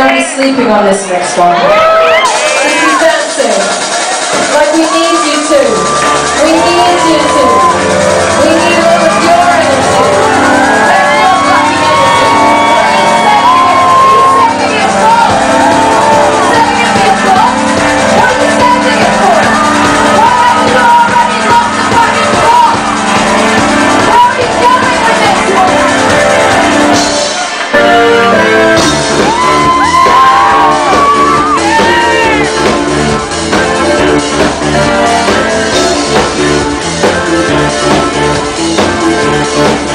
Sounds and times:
Music: 0:00.0 - 0:39.9.

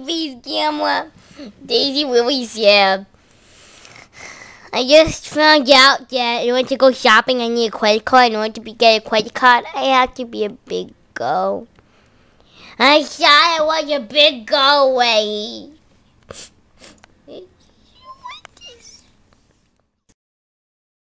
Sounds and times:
Speech: 0:00.0 - 0:03.1, 0:04.7 - 0:11.7, 0:12.8 - 0:15.8, 0:17.3 - 0:19.1
Inside, small room: 0:00.0 - 0:20.1.

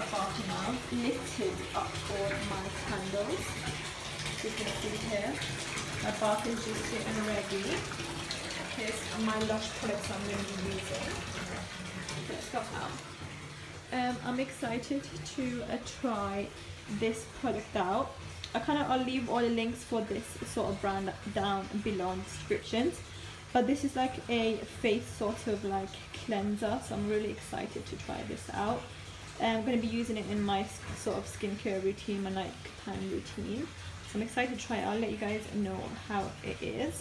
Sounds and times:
Bathtub (filling or washing): 0:00.0 - 0:37.0
Water: 0:00.0 - 0:37.0
Water tap, faucet: 0:00.0 - 0:37.0.

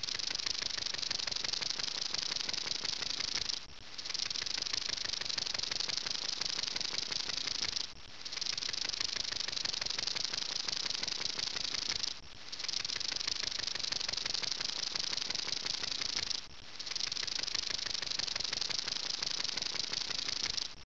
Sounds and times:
Hiss: 0:00.0 - 0:20.8.

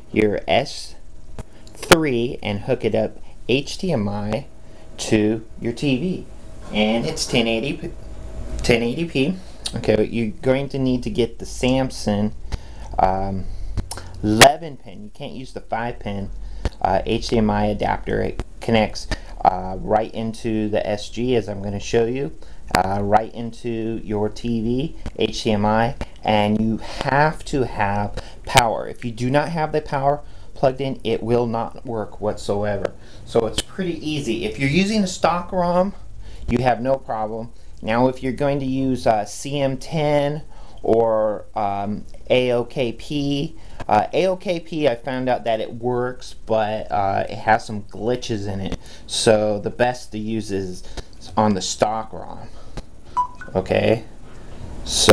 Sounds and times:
Speech: 0:00.0 - 0:01.0, 0:01.8 - 0:07.9, 0:08.6 - 0:52.6, 0:53.5 - 0:54.1, 0:54.9 - 0:55.1
Inside, small room: 0:00.0 - 0:55.1.

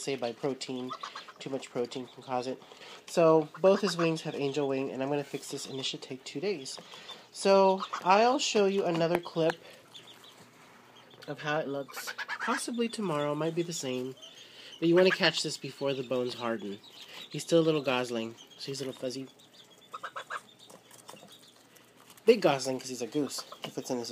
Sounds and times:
Goose: 0:11.9 - 0:12.8, 0:19.9 - 0:20.5.

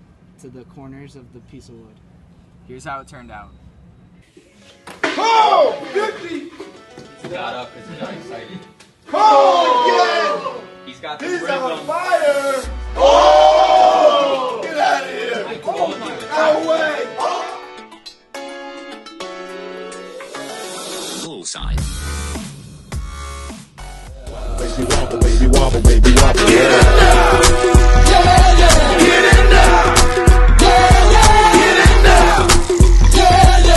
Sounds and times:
Speech: 0:00.4 - 0:02.0
Music: 0:04.3 - 0:33.7.

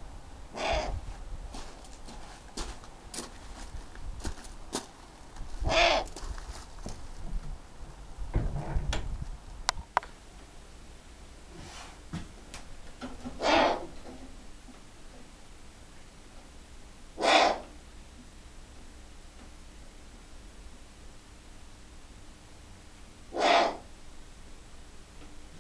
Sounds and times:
Owl: 0:00.5 - 0:01.0, 0:05.6 - 0:06.2, 0:13.4 - 0:14.0, 0:17.2 - 0:17.8, 0:23.3 - 0:23.9.

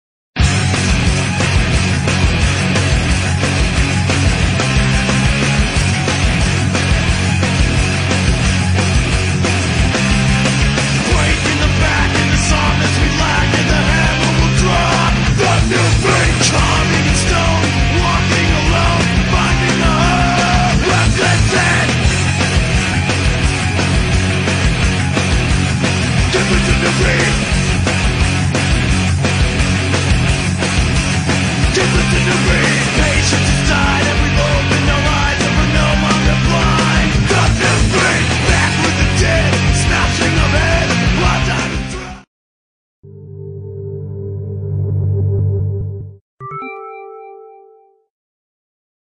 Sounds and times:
Music: 0:00.4 - 0:42.3, 0:43.1 - 0:48.1.

